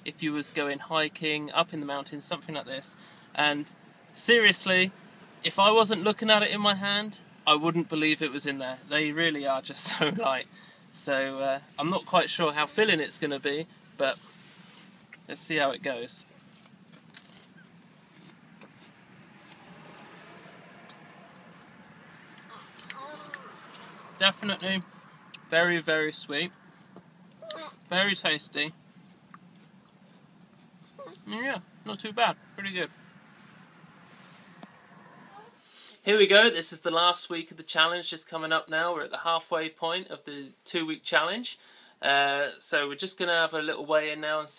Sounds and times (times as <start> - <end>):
Speech: 0.0 - 4.9, 5.5 - 10.4, 11.0 - 14.2, 15.3 - 16.2, 27.9 - 28.7, 31.3 - 32.9, 36.0 - 44.5.